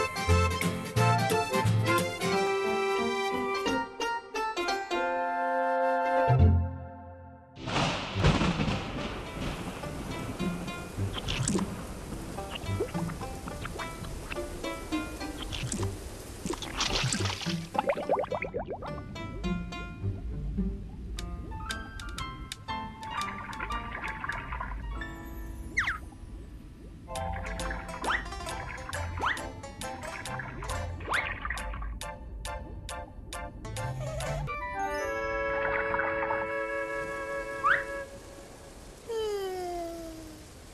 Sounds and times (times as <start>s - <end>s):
Music: 0.0s - 7.6s, 8.8s - 16.0s, 17.2s - 26.4s, 27.1s - 38.1s.